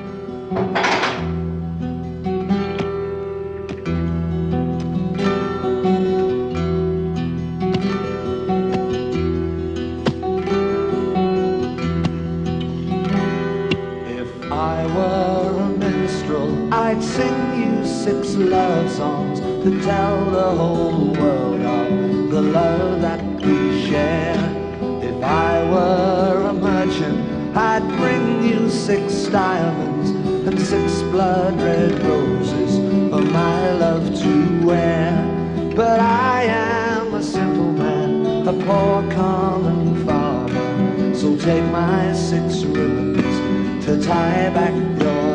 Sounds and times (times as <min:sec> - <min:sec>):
Music: 0:00.0 - 0:45.3.